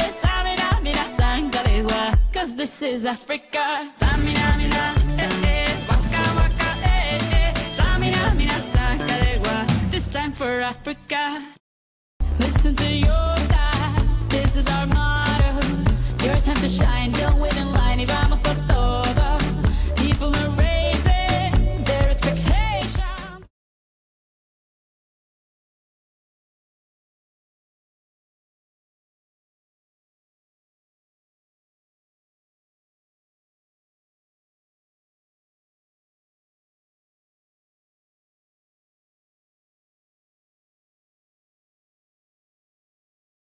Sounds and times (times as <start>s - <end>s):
Music: 0.0s - 3.2s, 4.0s - 11.2s, 12.2s - 23.5s.